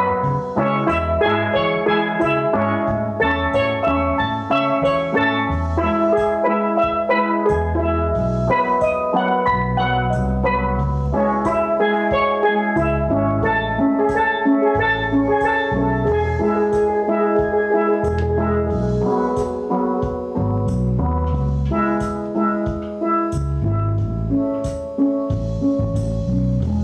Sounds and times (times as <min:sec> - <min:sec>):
Steelpan: 0:00.0 - 0:26.8.